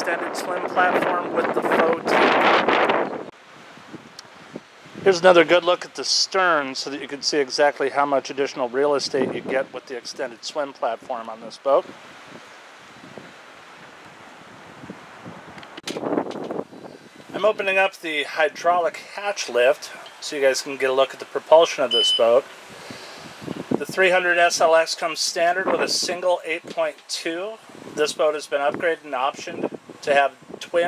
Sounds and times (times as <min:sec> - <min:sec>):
Speech: 0:00.0 - 0:02.3, 0:05.0 - 0:11.9, 0:17.3 - 0:22.4, 0:23.8 - 0:30.8.